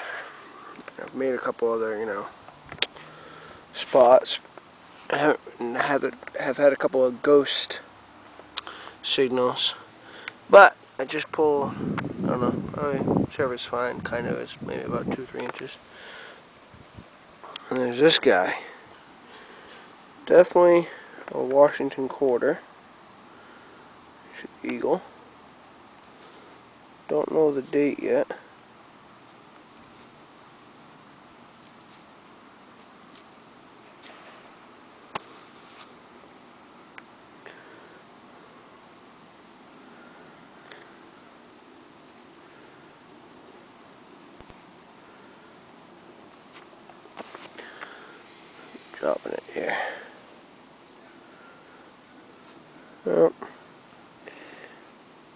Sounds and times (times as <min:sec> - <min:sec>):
Outside, rural or natural: 0:00.0 - 0:55.3
Speech: 0:01.0 - 0:02.3, 0:03.8 - 0:04.4, 0:05.1 - 0:07.9, 0:09.0 - 0:09.8, 0:10.5 - 0:15.8, 0:17.5 - 0:18.8, 0:20.2 - 0:22.7, 0:24.3 - 0:25.1, 0:27.1 - 0:28.5, 0:48.9 - 0:50.1, 0:53.0 - 0:53.6.